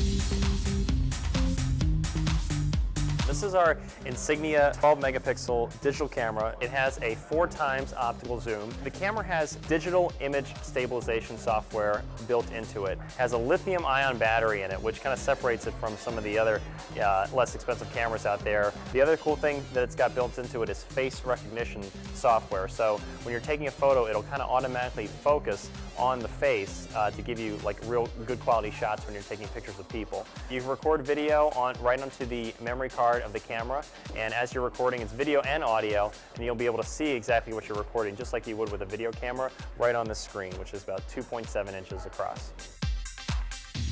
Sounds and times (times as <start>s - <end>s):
Music: 0.0s - 43.9s
Speech: 3.3s - 42.6s.